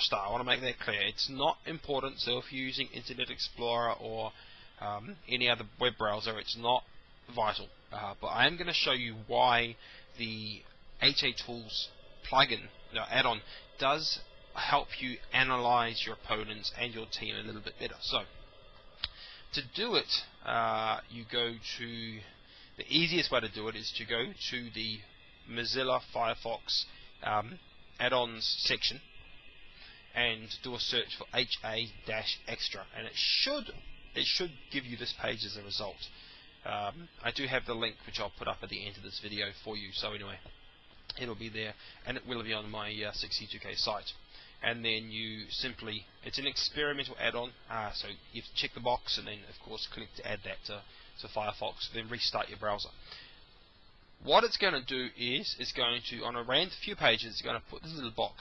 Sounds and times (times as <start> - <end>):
Speech: 0.0 - 18.3, 19.5 - 29.0, 30.1 - 40.5, 41.1 - 53.0, 54.2 - 58.4.